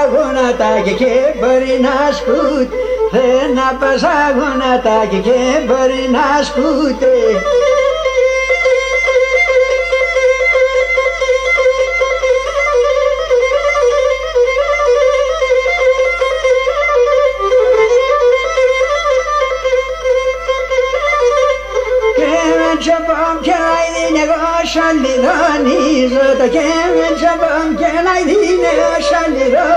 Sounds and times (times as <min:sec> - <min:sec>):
Traditional music: 0:00.0 - 0:29.7.